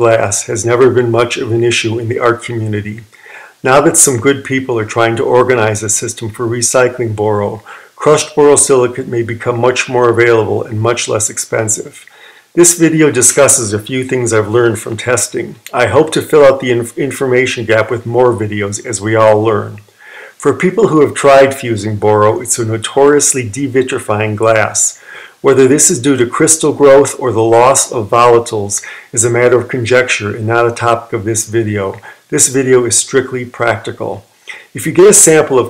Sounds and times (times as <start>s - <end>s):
Speech: 0.0s - 35.6s.